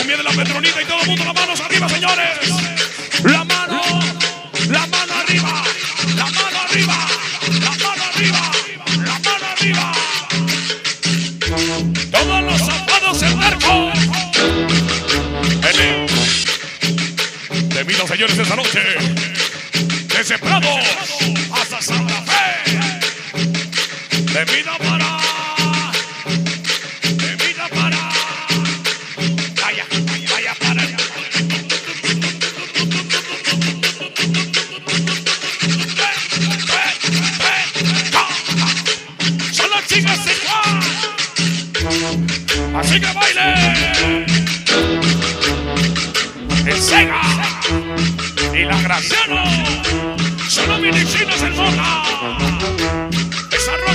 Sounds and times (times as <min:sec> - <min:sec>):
Music: 0:00.0 - 0:53.9.